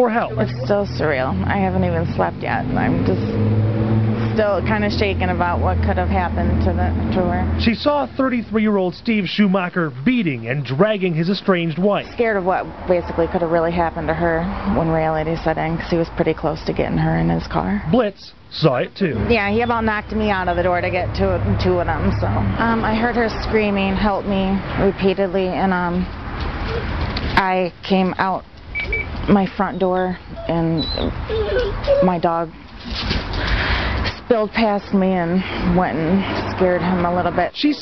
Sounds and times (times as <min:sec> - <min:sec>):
Speech: 0:00.0 - 0:03.3, 0:04.3 - 0:26.1, 0:27.4 - 0:28.4, 0:29.3 - 0:31.1, 0:32.0 - 0:32.6, 0:34.2 - 0:37.8
Outside, urban or manmade: 0:00.0 - 0:37.8.